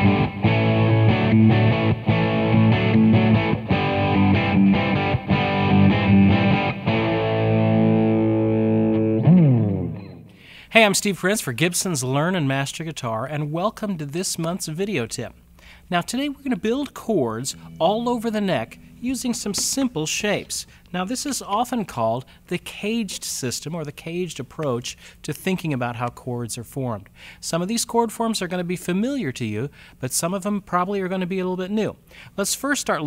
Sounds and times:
Speech: 10.7s - 33.0s.

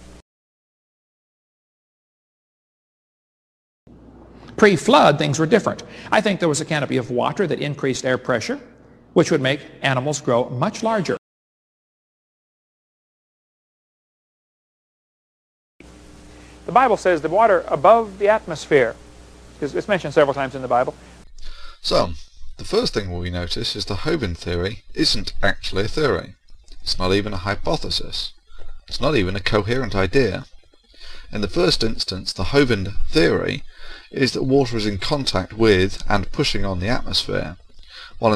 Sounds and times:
Speech: 4.6s - 11.2s, 16.7s - 19.0s, 19.6s - 21.0s, 21.7s - 30.5s, 31.2s - 38.3s.

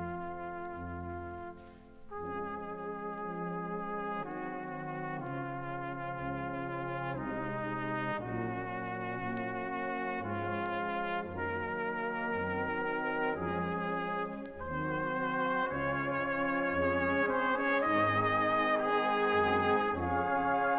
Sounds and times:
Trumpet: 0.0s - 20.7s.

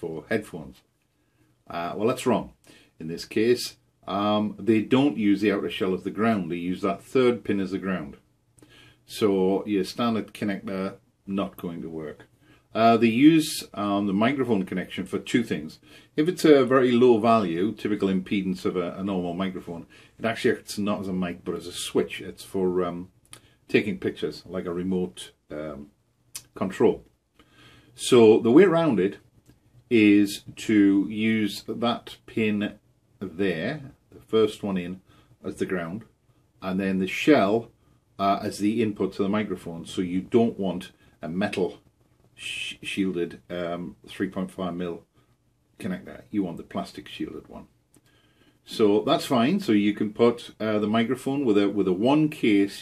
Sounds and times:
Speech: 0.0s - 0.8s, 1.6s - 8.2s, 9.1s - 27.1s, 28.0s - 29.2s, 29.9s - 41.8s, 42.4s - 45.1s, 45.8s - 47.7s, 48.6s - 52.8s.

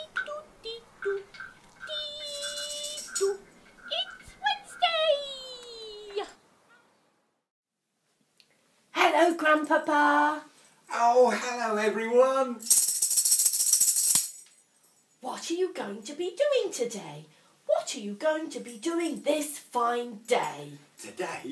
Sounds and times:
Speech: 1.9s - 6.3s, 15.2s - 21.5s.

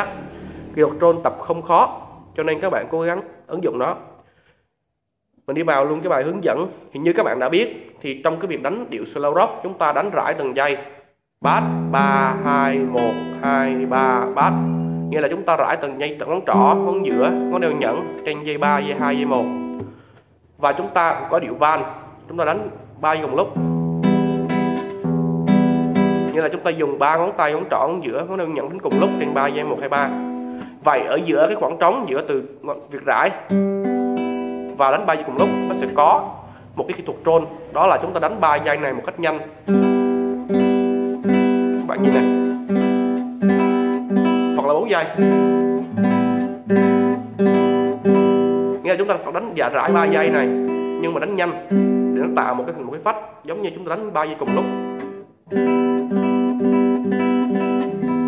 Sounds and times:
Acoustic guitar: 0.0s - 2.8s, 11.4s - 32.0s, 32.8s - 58.2s
Speech: 0.0s - 4.1s, 5.4s - 19.6s, 20.6s - 23.6s, 26.3s - 30.2s, 30.8s - 33.5s, 34.7s - 39.6s, 41.8s - 42.5s, 44.6s - 45.3s, 48.8s - 54.8s.

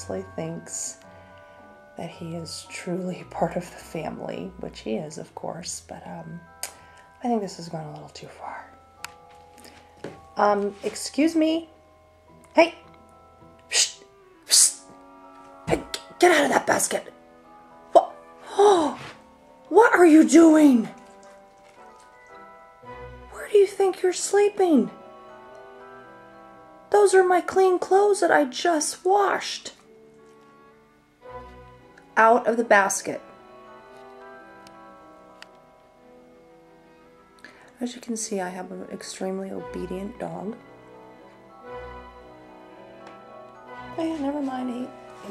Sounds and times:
Speech: 0.0s - 1.0s, 2.0s - 6.4s, 7.2s - 8.7s, 10.4s - 11.7s, 12.5s - 12.8s, 15.7s - 17.1s, 17.9s - 19.1s, 19.7s - 21.0s, 23.4s - 25.0s, 26.9s - 29.8s, 32.2s - 33.2s, 37.8s - 40.6s, 43.9s - 45.3s.

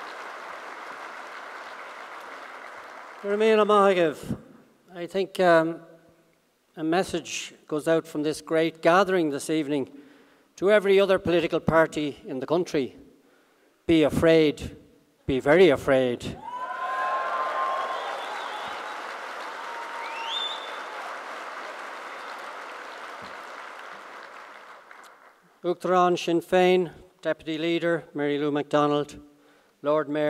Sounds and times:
Male speech, man speaking: 3.3s - 5.8s, 6.8s - 9.9s, 10.6s - 13.0s, 13.9s - 16.4s, 25.6s - 29.2s, 29.8s - 30.3s.

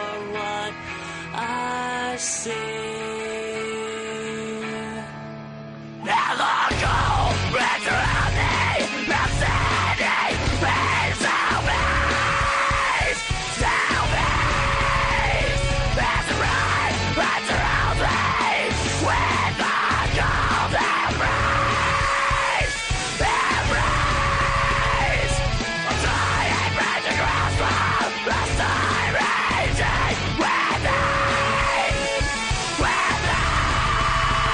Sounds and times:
Exciting music: 6.1s - 34.5s.

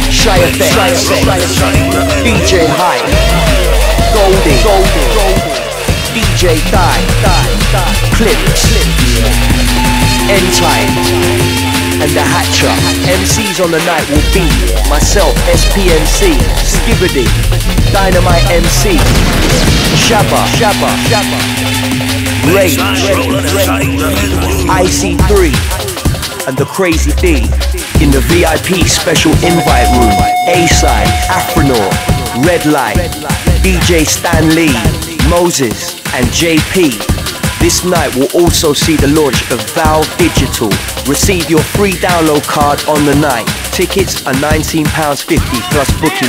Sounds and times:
Speech: 0.0s - 9.4s, 10.1s - 11.4s, 12.0s - 19.2s, 20.0s - 21.5s, 22.4s - 25.8s, 26.4s - 46.2s
Music: 0.0s - 46.2s.

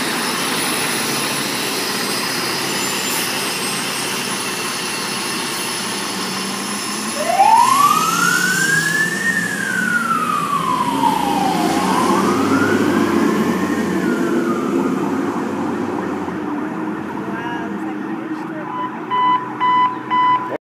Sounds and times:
Fire engine, fire truck (siren): 0.0s - 20.6s
Truck: 0.0s - 20.6s
Speech: 17.1s - 18.9s.

